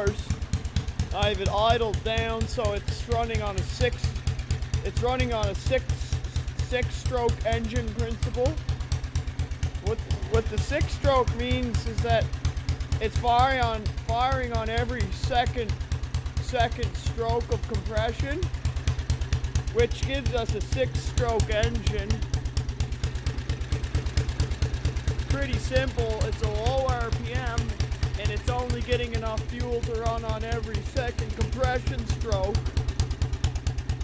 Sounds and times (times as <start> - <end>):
Speech: 0.0 - 0.3, 1.1 - 4.2, 4.8 - 8.6, 9.8 - 12.3, 13.0 - 15.8, 16.4 - 18.5, 19.7 - 22.2, 25.3 - 32.6
Medium engine (mid frequency): 0.0 - 34.0.